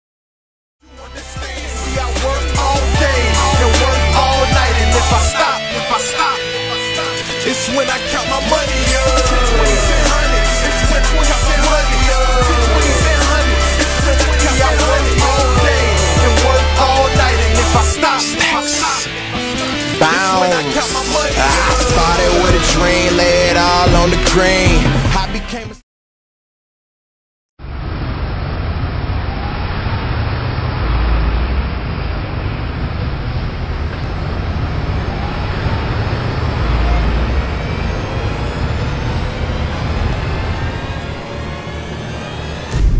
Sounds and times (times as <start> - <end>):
Music: 0.8 - 25.8, 36.5 - 43.0.